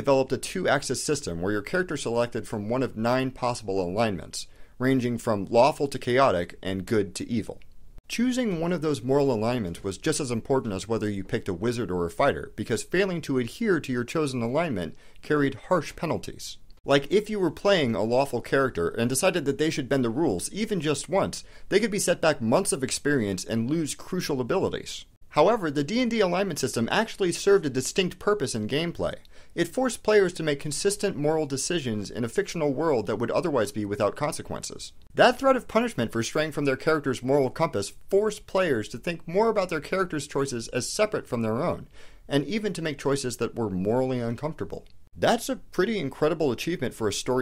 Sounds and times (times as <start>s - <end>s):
Speech: 0.0s - 47.4s.